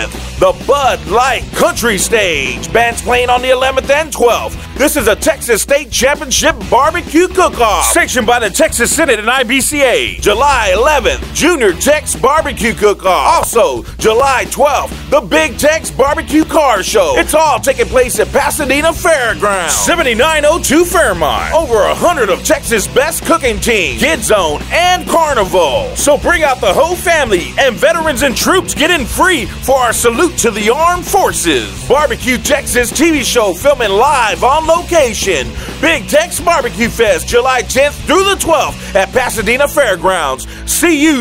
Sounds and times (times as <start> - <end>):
Rock and roll: 0.0 - 41.2
Speech: 0.0 - 41.2.